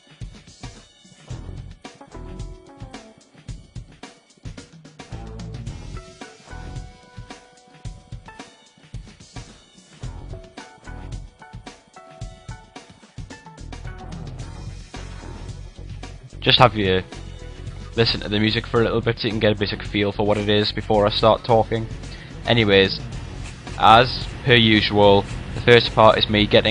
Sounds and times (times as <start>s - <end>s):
Music: 0.0s - 26.7s
Speech: 16.4s - 17.1s, 18.0s - 23.0s, 23.8s - 26.7s.